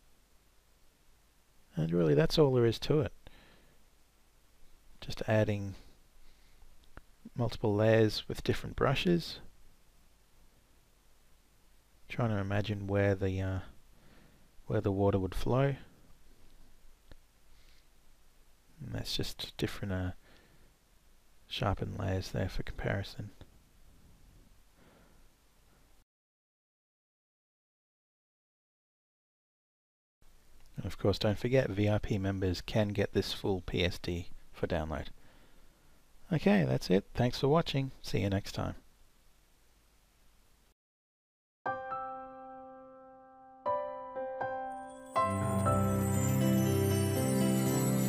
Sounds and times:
Inside, small room: 0.0s - 26.0s, 30.2s - 40.8s
Speech: 1.7s - 3.2s, 5.0s - 5.8s, 7.3s - 9.5s, 12.1s - 13.8s, 14.7s - 15.9s, 18.8s - 20.2s, 21.5s - 23.4s, 30.8s - 35.2s, 36.2s - 38.8s.

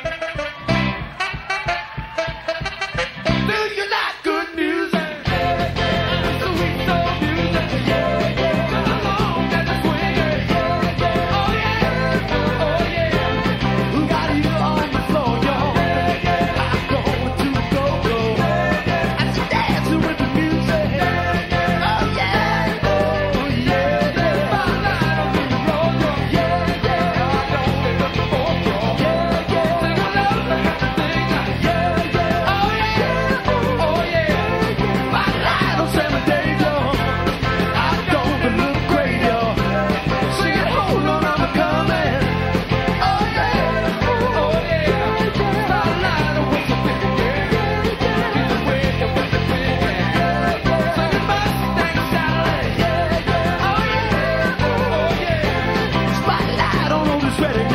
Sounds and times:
Soul music: 0.0s - 57.7s.

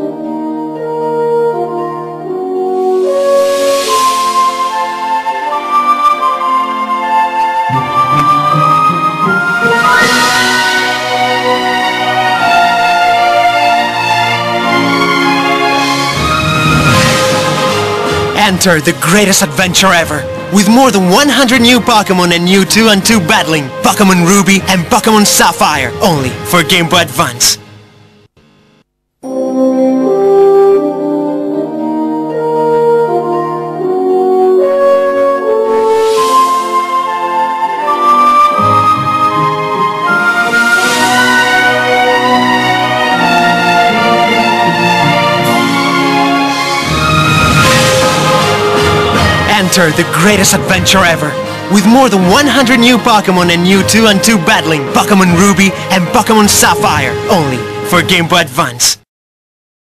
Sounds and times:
Music: 0.0s - 59.1s
Speech: 18.4s - 27.6s, 49.5s - 59.1s.

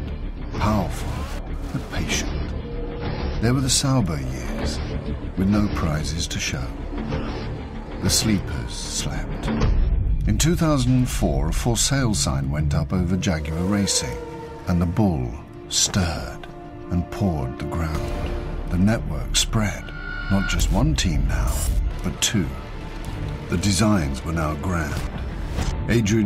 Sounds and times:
Music: 0.0s - 26.2s
Speech: 0.6s - 2.4s, 3.4s - 4.8s, 5.4s - 6.8s, 8.0s - 9.5s, 10.3s - 18.1s, 18.7s - 22.6s, 23.5s - 25.1s, 25.8s - 26.2s.

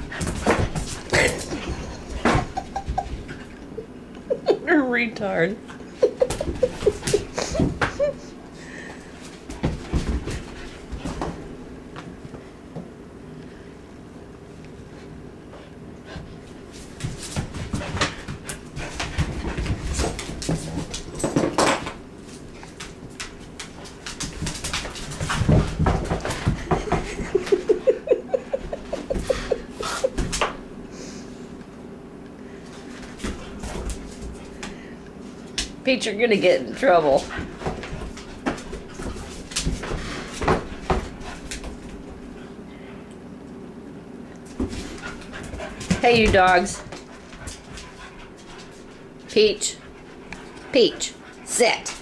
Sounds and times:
Speech: 4.6s - 5.6s, 35.8s - 37.3s, 46.0s - 46.9s, 49.3s - 49.8s, 50.7s - 52.0s.

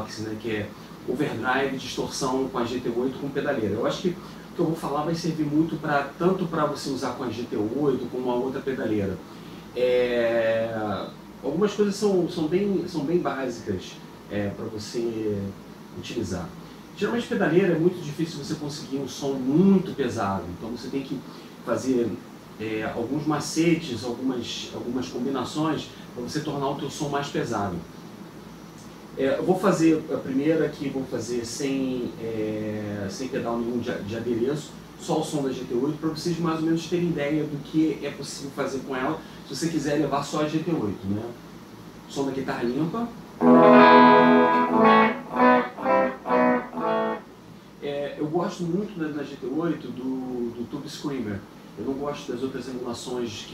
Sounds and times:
Speech: 0.0s - 28.0s, 28.8s - 47.2s, 47.8s - 53.5s.

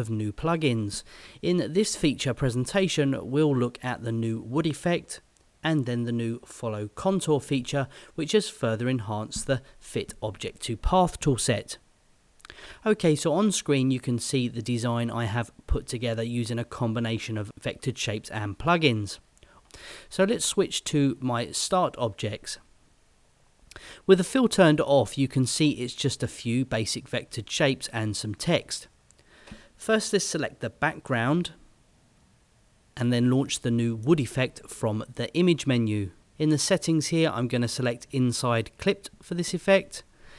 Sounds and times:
Speech: 0.0s - 11.8s, 12.8s - 19.2s, 20.1s - 22.7s, 24.1s - 28.9s, 29.8s - 31.6s, 33.0s - 40.1s.

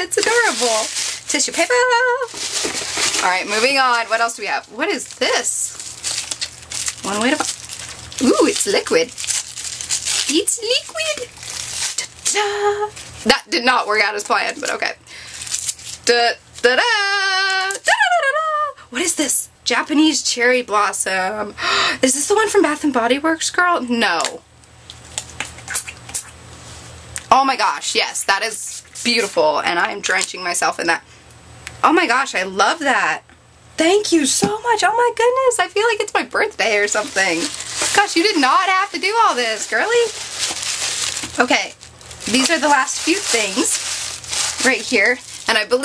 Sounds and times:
Speech: 0.0s - 2.3s, 3.2s - 5.8s, 7.0s - 7.5s, 8.2s - 9.1s, 10.3s - 11.3s, 12.3s - 15.0s, 16.1s - 24.4s, 27.3s - 31.0s, 31.8s - 33.2s, 33.8s - 40.2s, 41.4s - 43.8s, 44.6s - 45.8s
Inside, small room: 0.0s - 45.8s.

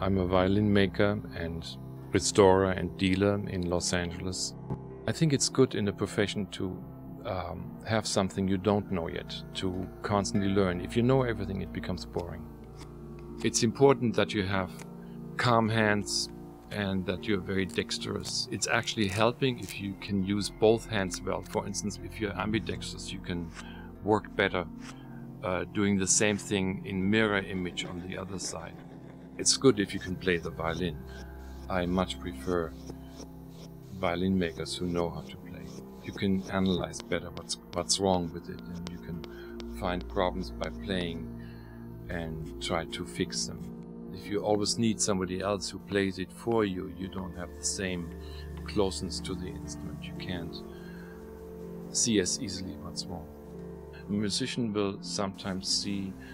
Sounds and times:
Speech: 0.0s - 12.5s, 13.4s - 14.8s, 15.4s - 24.7s, 25.4s - 28.8s, 29.4s - 31.0s, 31.7s - 32.7s, 34.0s - 41.3s, 42.1s - 50.6s, 51.9s - 53.3s, 54.1s - 56.2s.

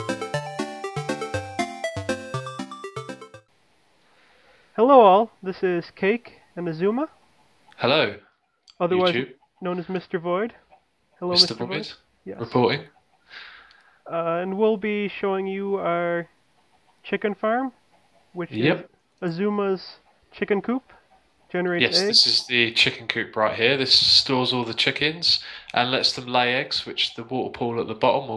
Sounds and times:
Speech: 4.8s - 7.1s, 7.8s - 8.2s, 8.8s - 10.5s, 11.2s - 12.9s, 14.1s - 16.3s, 17.1s - 17.7s, 18.4s - 20.9s, 21.5s - 28.3s.

